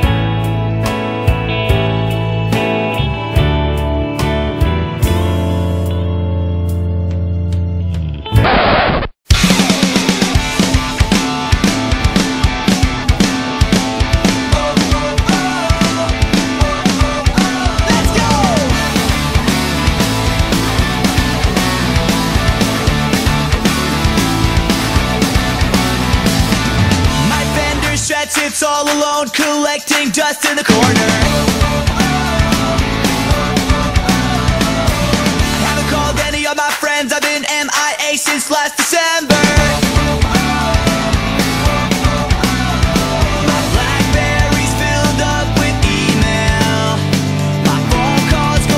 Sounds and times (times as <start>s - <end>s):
Background music: 0.0s - 8.4s, 9.3s - 48.7s.